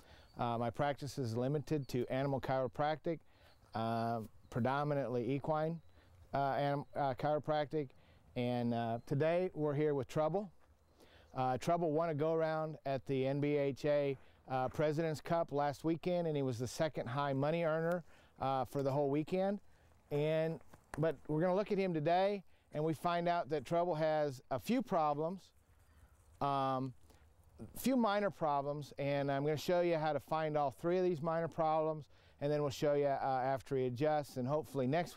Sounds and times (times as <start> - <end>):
Speech: 0.4 - 10.5, 11.4 - 25.5, 26.4 - 26.9, 27.6 - 35.1.